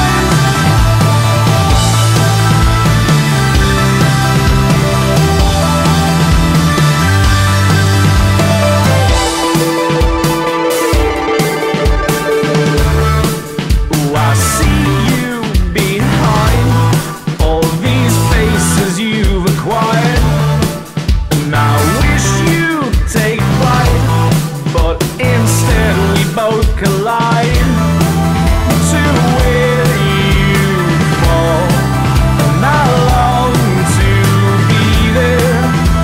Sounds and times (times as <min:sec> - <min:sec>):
Grunge: 0:00.0 - 0:36.0.